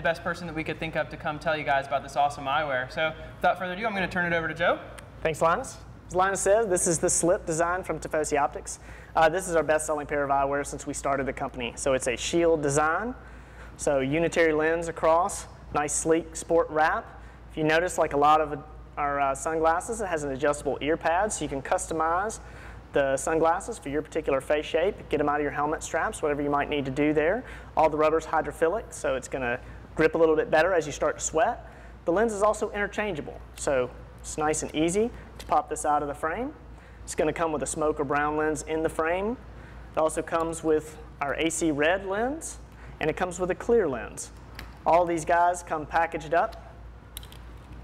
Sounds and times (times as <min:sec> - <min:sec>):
Speech: 0:00.0 - 0:13.2, 0:13.8 - 0:22.4, 0:23.0 - 0:39.4, 0:40.0 - 0:44.3, 0:44.9 - 0:46.7.